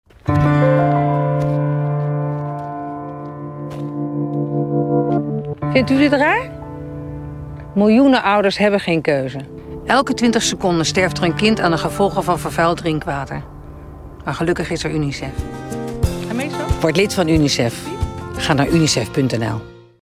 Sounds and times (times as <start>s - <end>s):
Music: 0.1s - 20.0s.